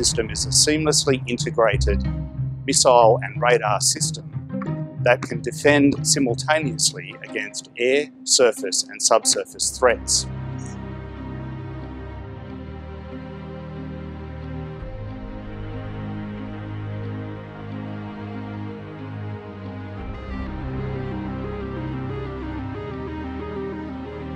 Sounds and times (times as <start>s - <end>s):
Theme music: 0.0s - 24.3s.